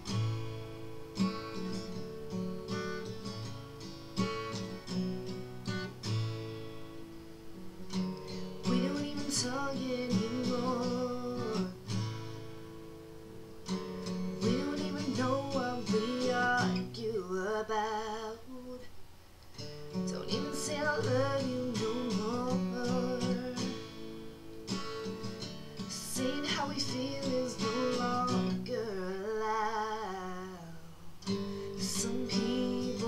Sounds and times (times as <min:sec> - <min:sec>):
Music: 0:00.0 - 0:18.2, 0:19.5 - 0:33.0.